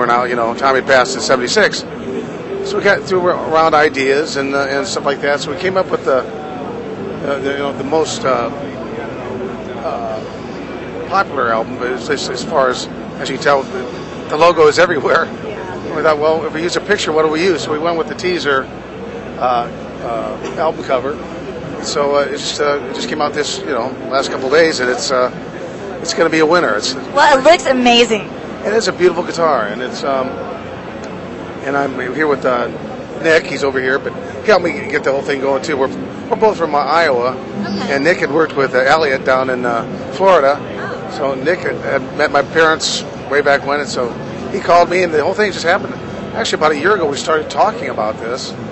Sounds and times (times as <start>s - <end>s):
Speech: 0.0s - 1.9s, 2.7s - 6.3s, 7.2s - 10.3s, 11.1s - 15.3s, 15.9s - 18.7s, 19.4s - 21.2s, 21.8s - 25.4s, 26.0s - 30.4s, 31.6s - 48.6s.